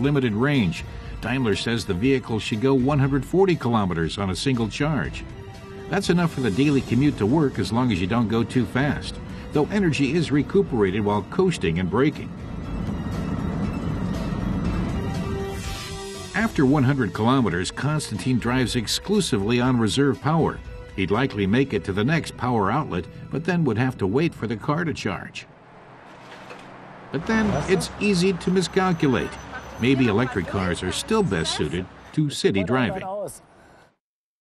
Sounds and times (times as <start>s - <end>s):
Speech: 0.0s - 5.2s, 5.9s - 12.3s, 16.4s - 25.5s, 27.2s - 33.4s
Music: 0.0s - 25.0s
Vehicle: 23.1s - 34.0s.